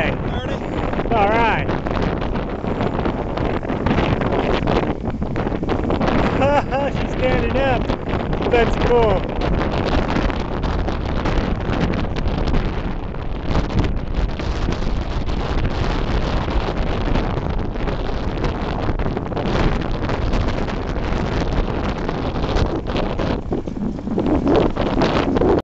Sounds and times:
Bicycle: 0:01.7 - 0:06.4, 0:07.8 - 0:08.5, 0:09.2 - 0:25.6.

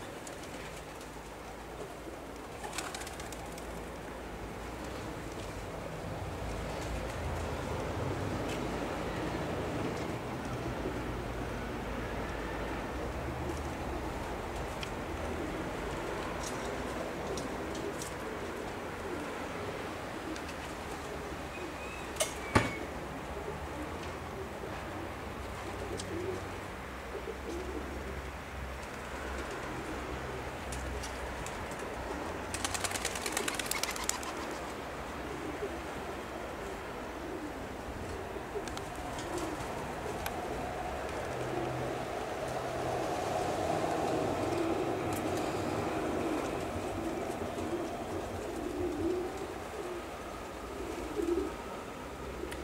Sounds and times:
Bird: 0:21.5 - 0:22.9.

